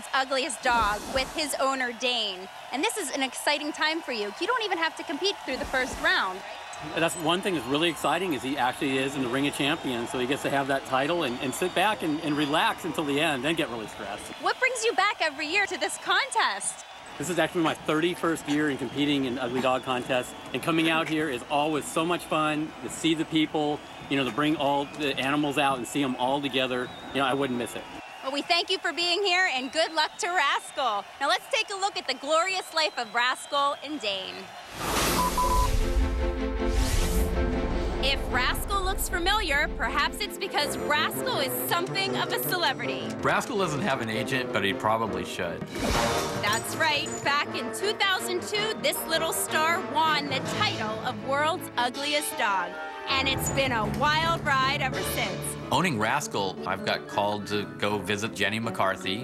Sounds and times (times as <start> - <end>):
Speech: 0.0 - 34.4, 38.1 - 45.6, 46.5 - 59.2.